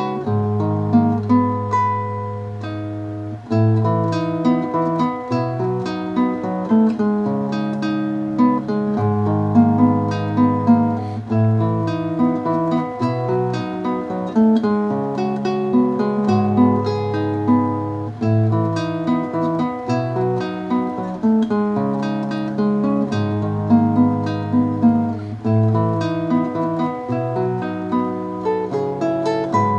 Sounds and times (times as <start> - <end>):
Acoustic guitar: 0.0 - 29.7
Strum: 0.0 - 29.7.